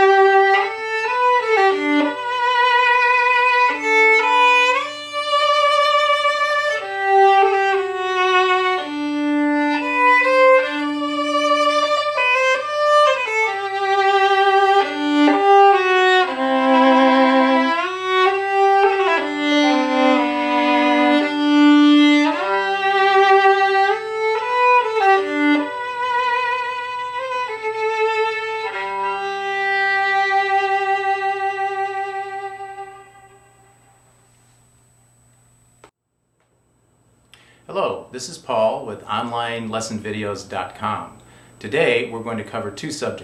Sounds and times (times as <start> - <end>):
Violin, fiddle: 0.0 - 33.5.